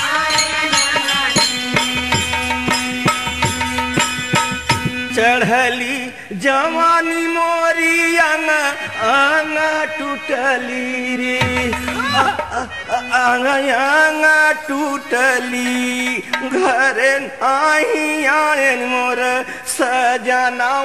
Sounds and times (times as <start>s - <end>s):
Music: 0.0s - 20.6s.